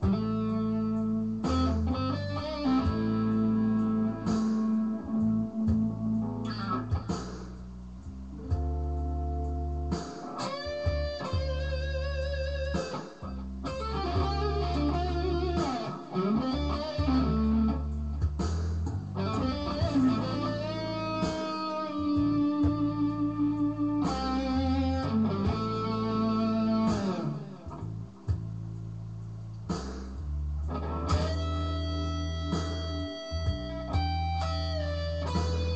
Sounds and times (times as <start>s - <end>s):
Tapping (guitar technique): 0.0s - 7.7s, 8.3s - 28.5s, 30.6s - 35.7s
Blues: 0.0s - 35.7s.